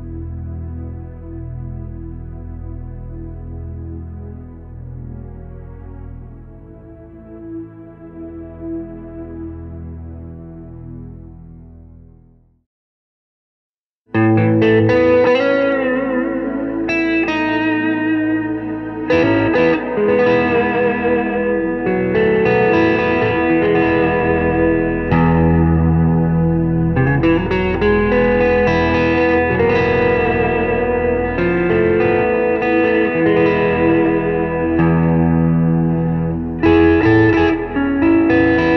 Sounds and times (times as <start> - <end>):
Guitar: 0.0 - 11.5, 14.1 - 38.7.